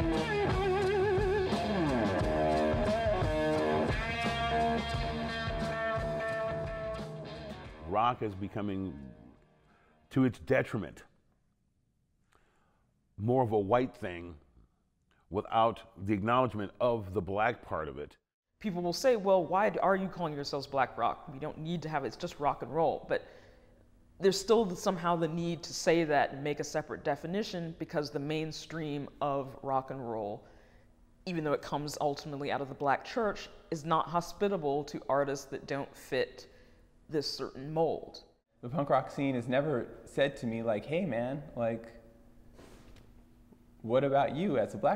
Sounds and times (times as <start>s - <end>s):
Speech: 7.8s - 9.3s, 10.1s - 11.1s, 13.2s - 14.4s, 15.3s - 23.2s, 31.3s - 36.5s, 37.1s - 42.0s, 43.8s - 44.9s.